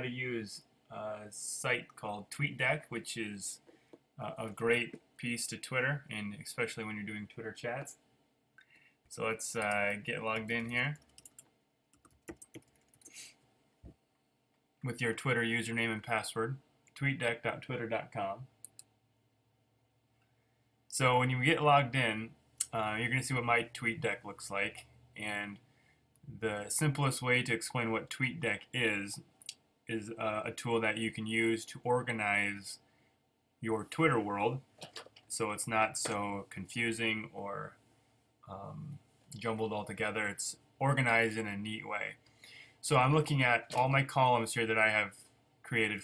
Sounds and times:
Speech: 0.0 - 3.6, 4.2 - 8.0, 9.1 - 11.0, 14.8 - 18.5, 20.9 - 25.6, 26.3 - 29.3, 29.9 - 32.8, 33.6 - 37.8, 38.5 - 42.2, 42.8 - 46.0.

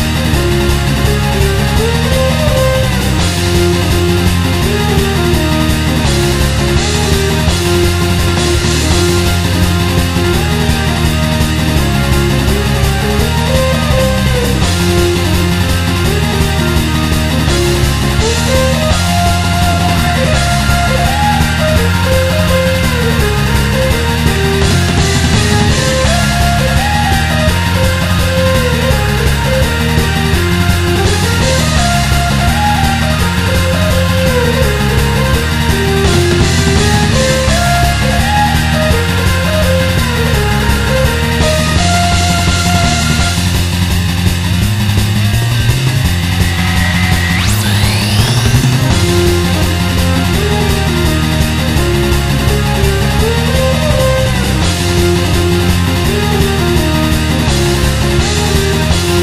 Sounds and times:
Music: 0.0 - 59.2.

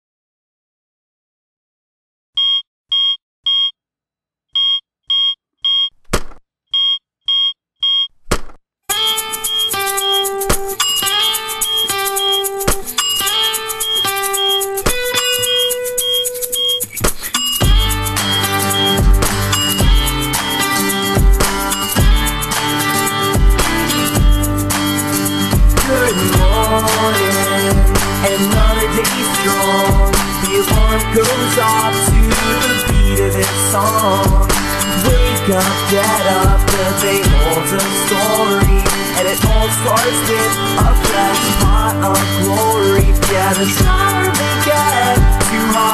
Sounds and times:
Musical instrument: 8.9 - 45.9.

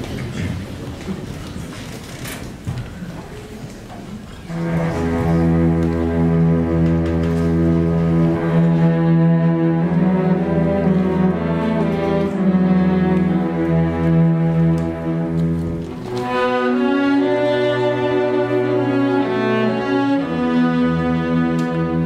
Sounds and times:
Cello: 3.7 - 22.0
Orchestra: 4.2 - 22.0
Double bass: 4.5 - 22.0.

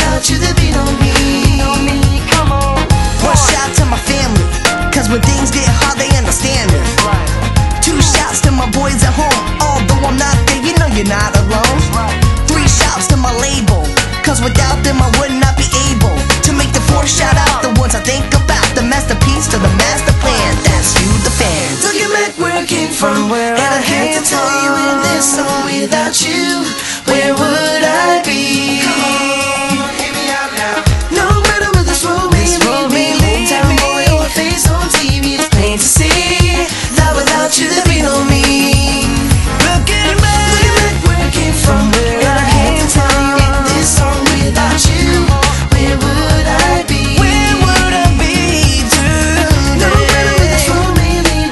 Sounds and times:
Music: 0.0 - 51.5.

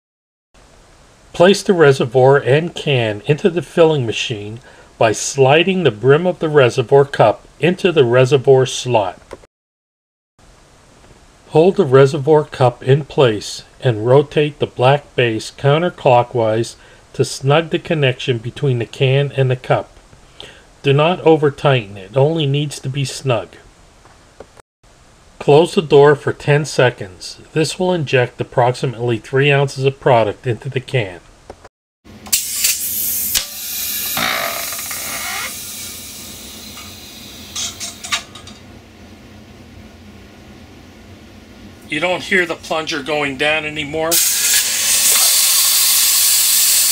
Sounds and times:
Speech: 1.4 - 9.2, 11.5 - 19.9, 20.8 - 23.7, 25.4 - 31.3, 41.9 - 44.2.

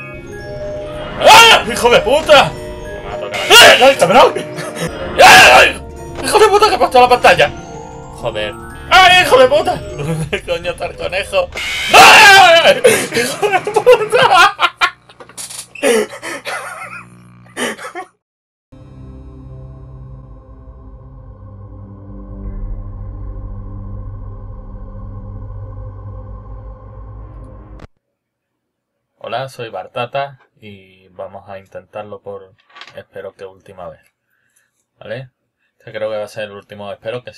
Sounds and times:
Music: 0.0 - 14.1, 18.7 - 27.9.

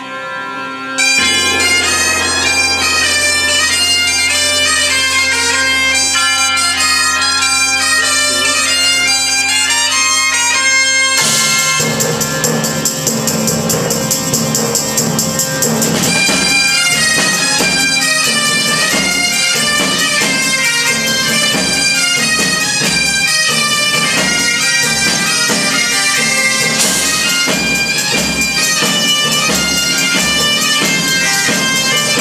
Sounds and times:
Music: 0.0 - 32.2.

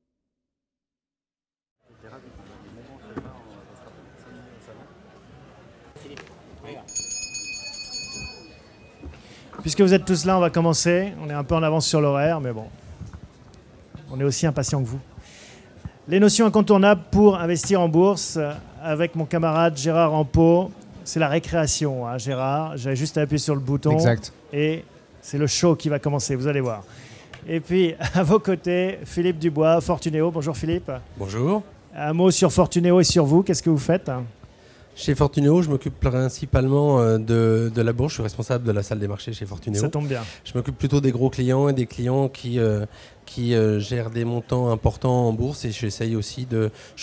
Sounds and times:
Speech: 1.9 - 5.2, 9.6 - 12.7, 14.0 - 15.1, 16.1 - 26.8, 27.5 - 34.4, 35.0 - 47.0.

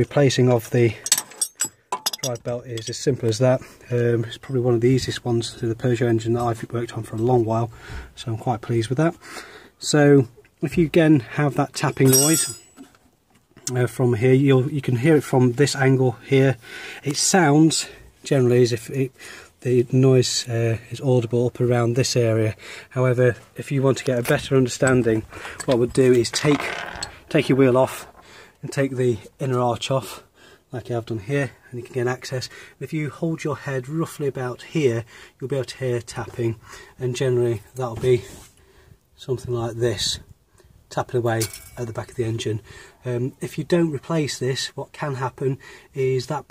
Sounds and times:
Speech: 0.0 - 1.0, 2.2 - 9.2, 9.8 - 12.6, 13.6 - 26.7, 27.3 - 38.4, 39.2 - 40.3, 40.9 - 46.5.

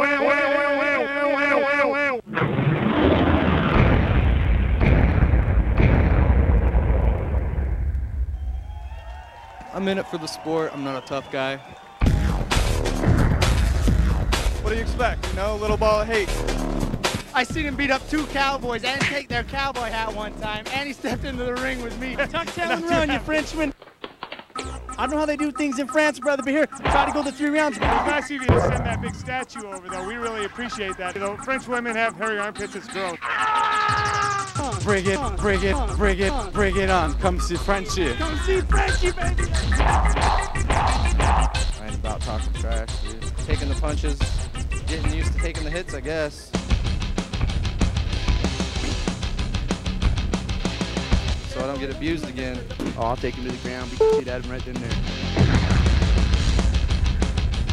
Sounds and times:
Speech: 9.7 - 11.6, 14.6 - 16.3, 17.3 - 23.8, 25.0 - 33.2, 34.6 - 39.4, 41.8 - 44.3, 44.9 - 46.5, 51.5 - 55.0
Music: 11.9 - 23.8, 24.6 - 57.7.

